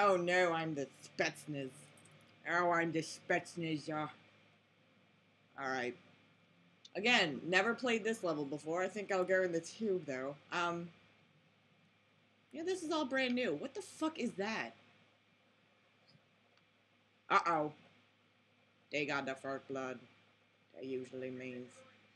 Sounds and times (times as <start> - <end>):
Speech: 0.0 - 4.2, 5.6 - 6.0, 6.9 - 11.0, 12.6 - 14.8, 17.3 - 17.8, 18.9 - 20.1, 20.7 - 22.1.